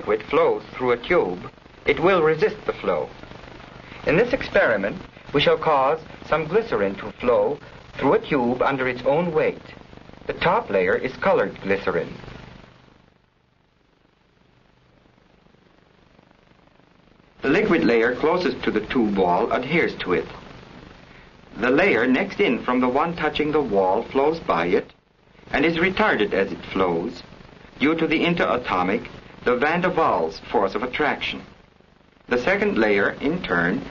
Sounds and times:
Speech: 0.0s - 3.2s, 4.0s - 12.2s, 17.4s - 20.4s, 21.6s - 31.5s, 32.3s - 33.9s.

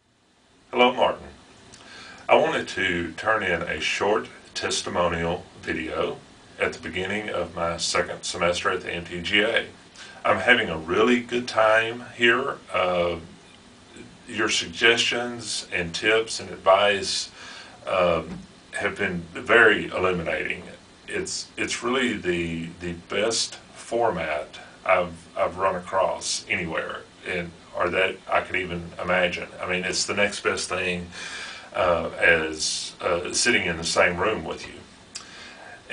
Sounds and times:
Speech: 0.7s - 1.4s, 2.3s - 34.9s, 35.6s - 35.9s.

